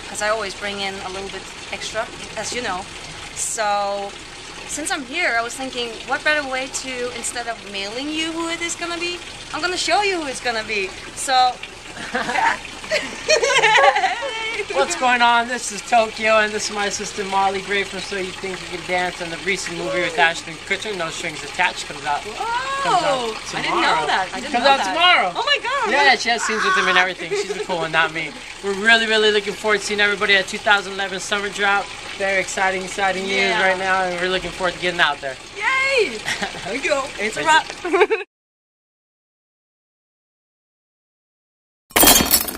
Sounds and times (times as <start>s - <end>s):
Water: 0.0s - 38.3s
Speech: 14.2s - 21.8s, 22.4s - 31.5s, 32.2s - 36.2s.